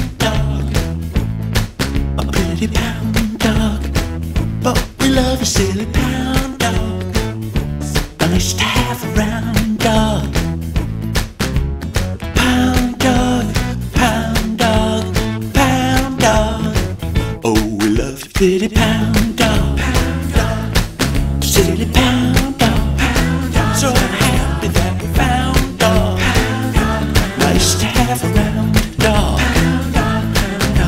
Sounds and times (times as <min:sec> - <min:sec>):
Happy music: 0:00.0 - 0:30.8.